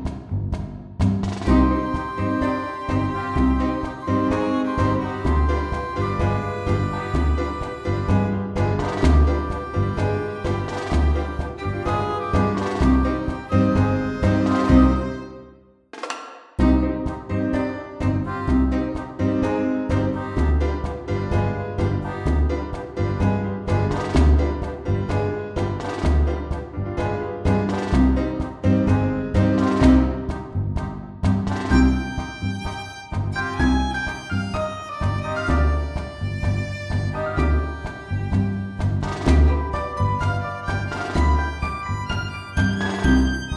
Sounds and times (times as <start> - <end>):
Music: 0.0 - 43.5.